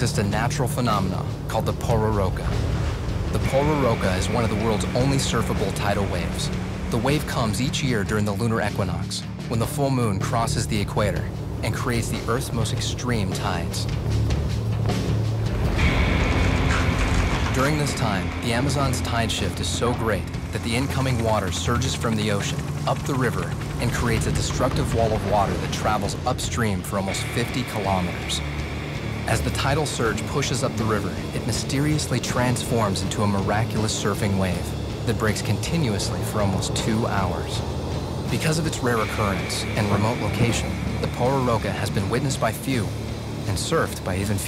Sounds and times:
Music: 0:00.0 - 0:44.4
Narration, monologue: 0:00.0 - 0:44.4.

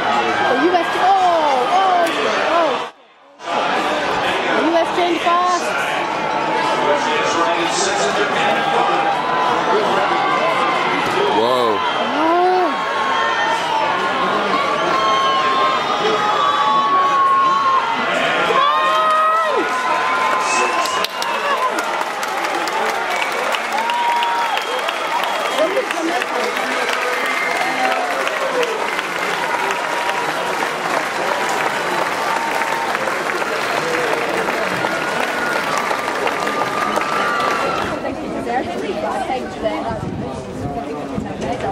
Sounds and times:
Run: 0:18.6 - 0:41.7
Chatter: 0:19.5 - 0:41.7
Outside, urban or manmade: 0:33.0 - 0:41.7.

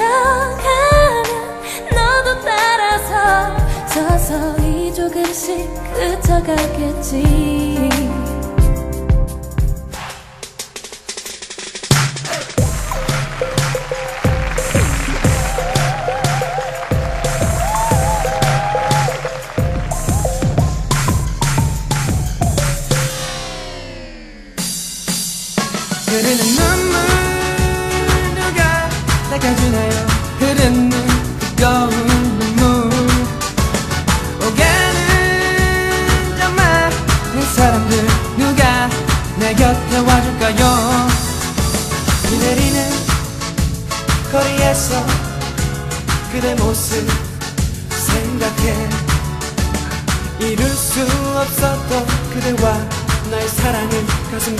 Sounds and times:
Music: 0:00.0 - 0:54.5.

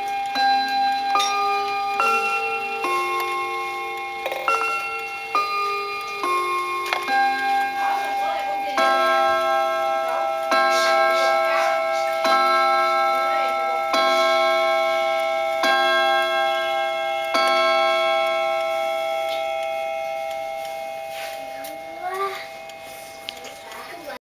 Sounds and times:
Speech: 0:07.1 - 0:15.0, 0:21.5 - 0:22.6, 0:23.2 - 0:24.2.

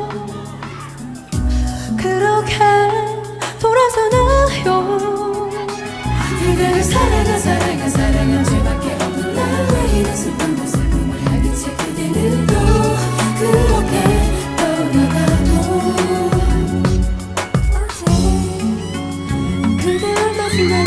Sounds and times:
Tender music: 0:00.0 - 0:20.8.

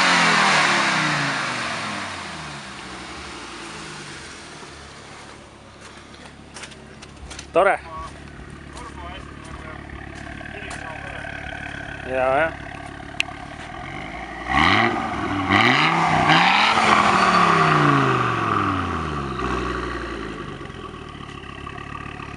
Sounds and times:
Speech: 0:07.5 - 0:09.9, 0:10.5 - 0:11.3, 0:12.0 - 0:12.6.

